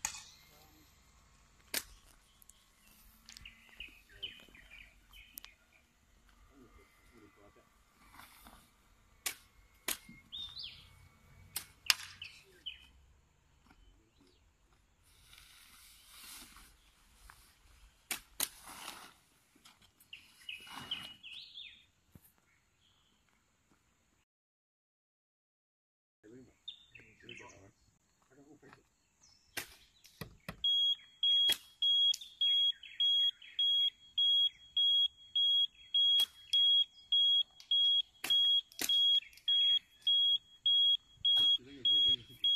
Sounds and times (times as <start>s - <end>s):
Smoke detector, smoke alarm: 30.6s - 42.5s.